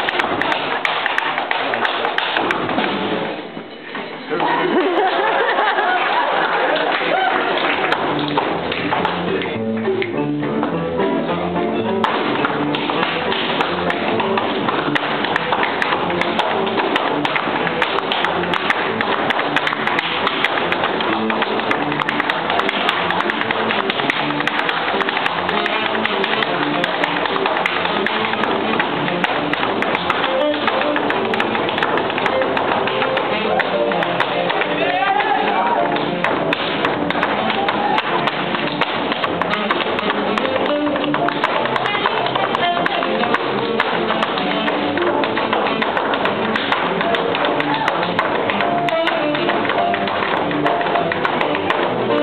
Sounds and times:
Music: 0.0 - 52.2.

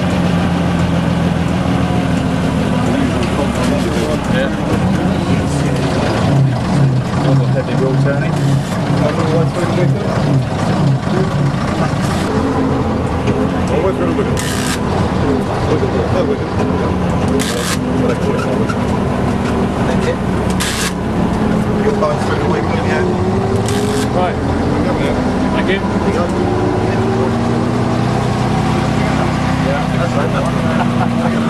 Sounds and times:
Bus: 0.0 - 31.4
Speech: 2.8 - 6.4, 7.2 - 10.2, 13.6 - 14.6, 15.3 - 18.8, 19.8 - 20.2, 21.8 - 23.2, 24.0 - 27.6, 28.8 - 31.4.

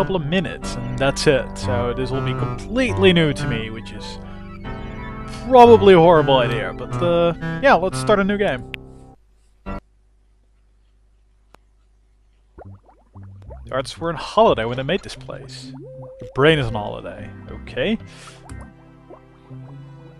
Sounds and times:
Speech: 0.0 - 4.2, 5.4 - 8.6, 13.7 - 18.1
Music: 0.0 - 9.2, 13.8 - 20.2.

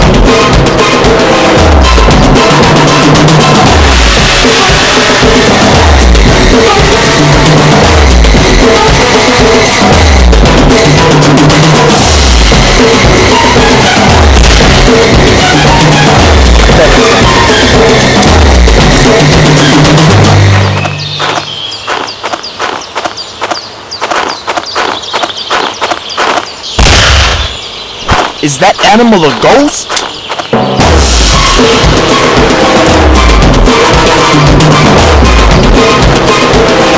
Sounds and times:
Music: 0.0 - 21.5, 30.5 - 36.9
Run: 20.8 - 26.5.

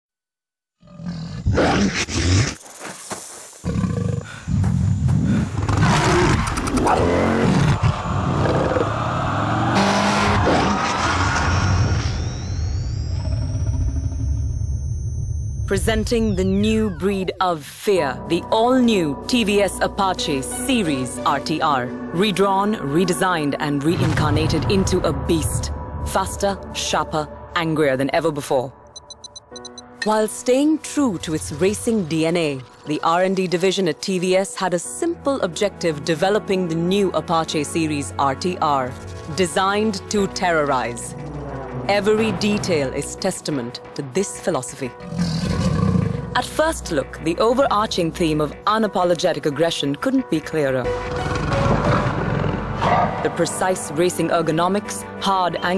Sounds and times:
Motorcycle: 5.6 - 14.9.

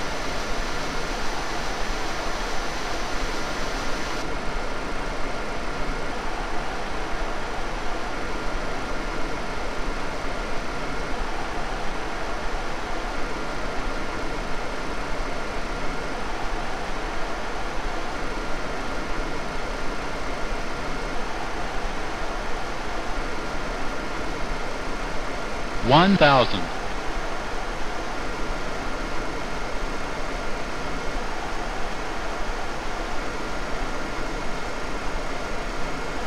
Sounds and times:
Speech: 25.8 - 26.7.

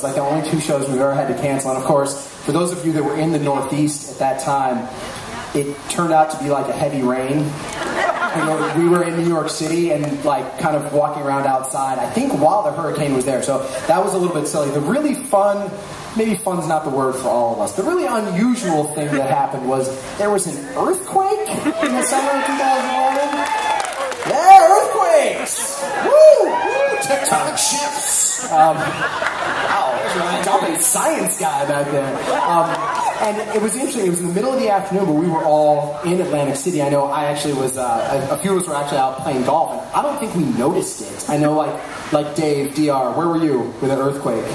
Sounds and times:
Speech: 0.0 - 4.9, 5.5 - 7.6, 8.3 - 23.4, 24.3 - 25.8, 27.0 - 28.9, 29.7 - 44.5.

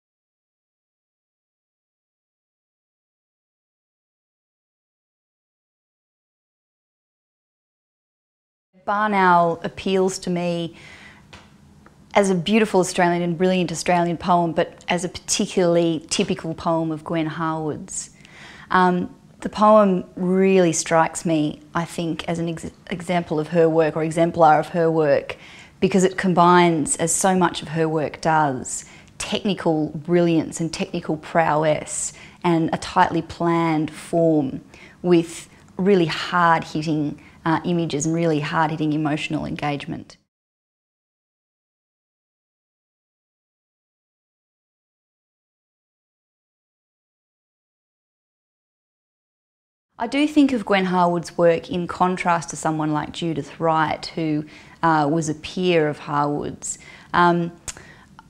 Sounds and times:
Speech: 8.8 - 10.8, 12.2 - 40.3, 50.0 - 58.2.

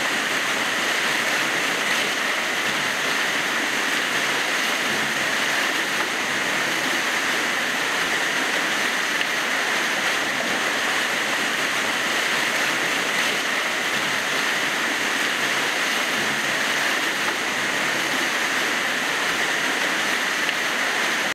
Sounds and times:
Stream: 0.0 - 21.3.

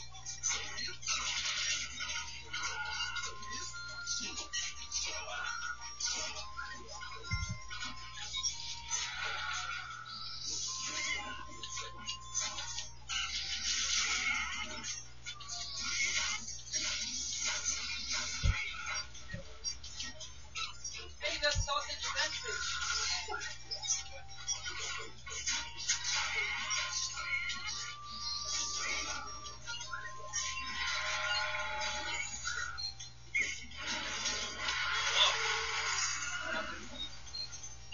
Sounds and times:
Speech: 21.2 - 23.5.

